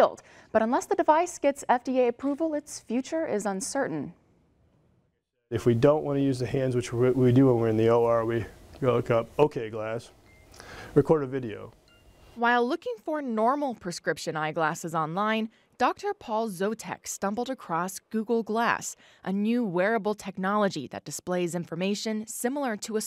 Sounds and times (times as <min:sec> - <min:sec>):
Speech: 0:05.6 - 0:10.1, 0:11.0 - 0:11.8.